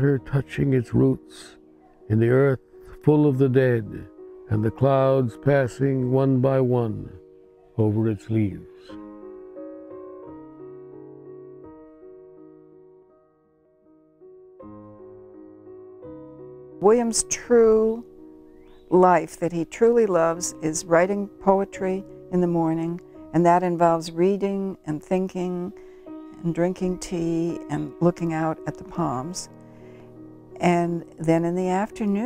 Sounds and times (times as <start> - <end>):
Speech: 0.0 - 7.2, 7.8 - 8.8, 16.8 - 18.0, 19.0 - 25.7, 26.4 - 29.5, 30.6 - 32.2
Music: 0.0 - 32.2.